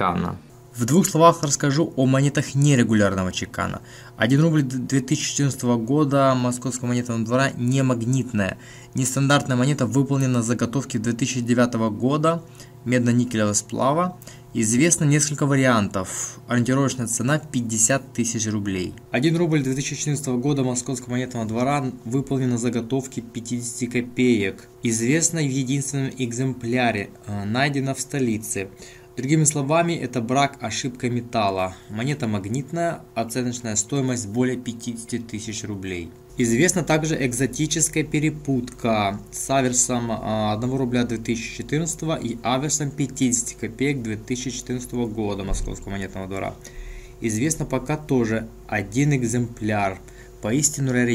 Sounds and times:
Speech: 0:00.0 - 0:46.6, 0:47.2 - 0:51.1.

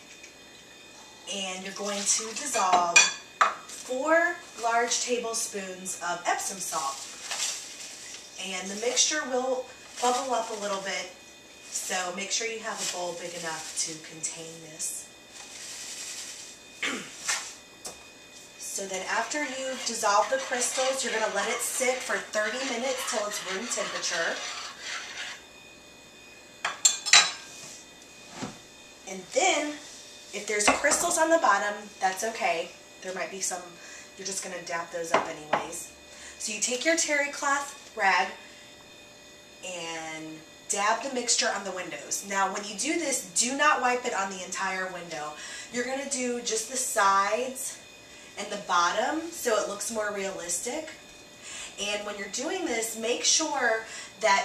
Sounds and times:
Speech: 0:01.3 - 0:03.0, 0:03.8 - 0:07.0, 0:08.4 - 0:11.2, 0:11.8 - 0:15.1, 0:18.6 - 0:24.4, 0:29.1 - 0:29.8, 0:30.4 - 0:38.4, 0:39.6 - 0:47.8, 0:48.4 - 0:51.0, 0:51.8 - 0:54.4.

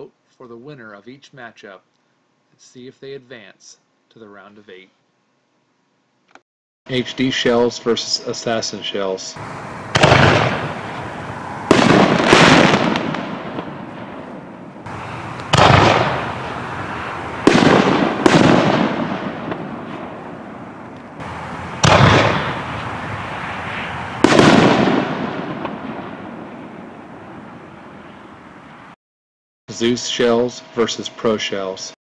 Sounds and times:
Artillery fire: 0:09.4 - 0:28.2
Fireworks: 0:09.4 - 0:28.2.

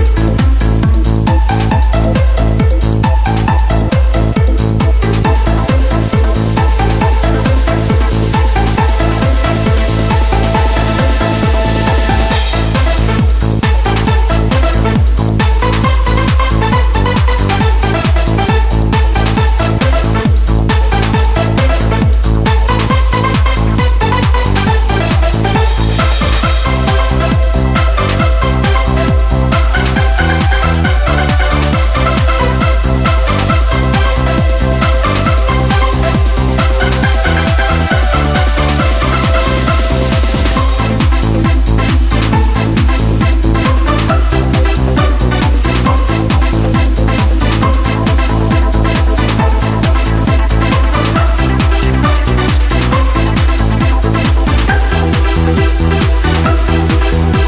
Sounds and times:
Techno: 0:00.0 - 0:57.4.

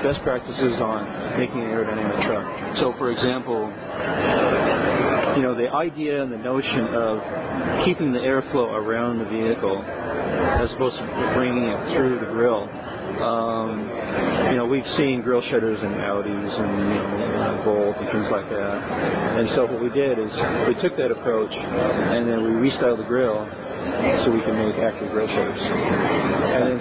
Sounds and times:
Speech: 0:00.0 - 0:03.8, 0:05.3 - 0:07.2, 0:07.8 - 0:09.9, 0:10.5 - 0:13.9, 0:14.5 - 0:26.8.

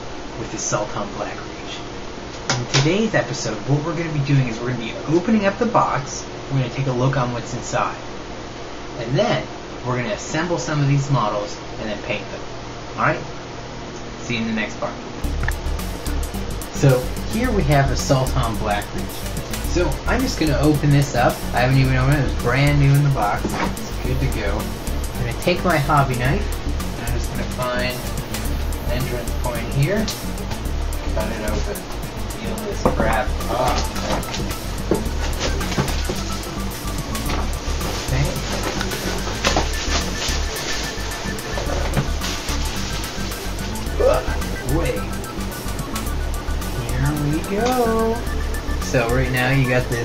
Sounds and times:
Speech: 0:00.4 - 0:01.9, 0:02.6 - 0:08.1, 0:09.0 - 0:13.3, 0:14.2 - 0:15.0, 0:16.8 - 0:28.0, 0:28.9 - 0:30.2, 0:31.2 - 0:34.2, 0:38.0 - 0:39.4, 0:44.0 - 0:45.2, 0:46.8 - 0:50.0
Music: 0:15.2 - 0:50.0.

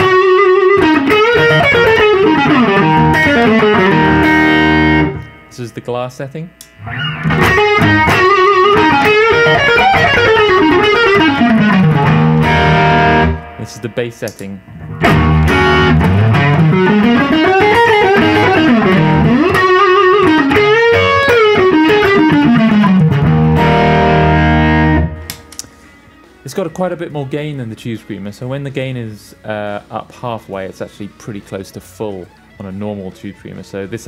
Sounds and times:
Effects unit: 0:00.0 - 0:05.7, 0:06.6 - 0:27.1, 0:32.0 - 0:34.0
Distortion: 0:00.0 - 0:34.0
Guitar: 0:00.0 - 0:34.0.

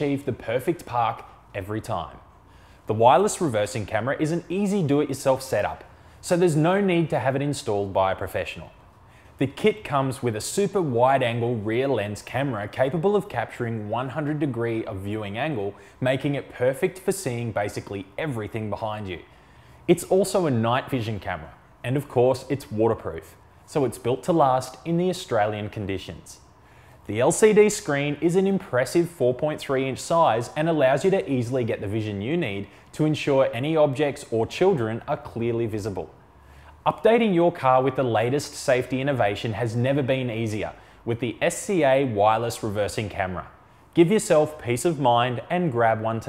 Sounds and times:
Speech: 0:00.0 - 0:02.2, 0:02.9 - 0:08.8, 0:09.4 - 0:19.3, 0:19.9 - 0:26.5, 0:27.1 - 0:36.2, 0:36.8 - 0:46.2.

